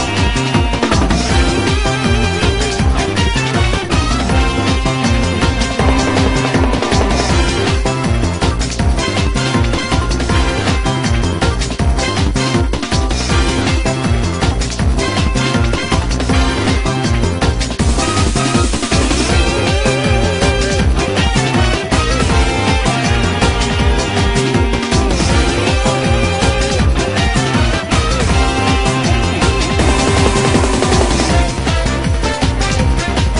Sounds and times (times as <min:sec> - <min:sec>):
Video game music: 0:00.0 - 0:33.3.